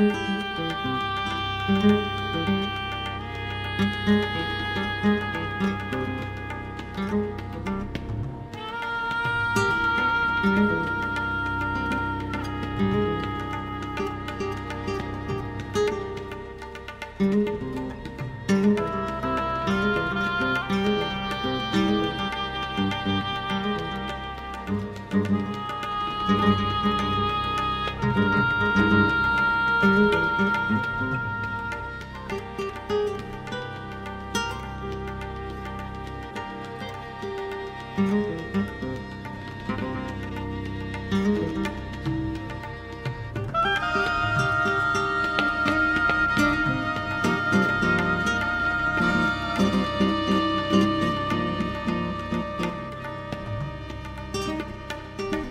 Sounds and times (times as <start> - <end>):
Bowed string instrument: 0.0 - 55.5.